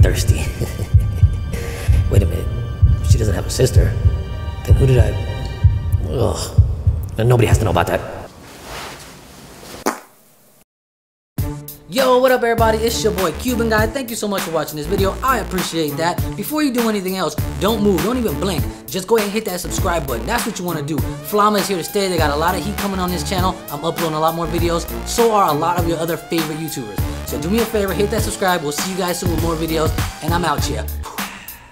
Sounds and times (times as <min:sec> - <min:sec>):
Speech: 0:00.0 - 0:00.5, 0:02.1 - 0:02.5, 0:04.7 - 0:05.3, 0:07.2 - 0:08.2, 0:11.9 - 0:31.0
Music: 0:00.0 - 0:07.8, 0:11.4 - 0:31.7.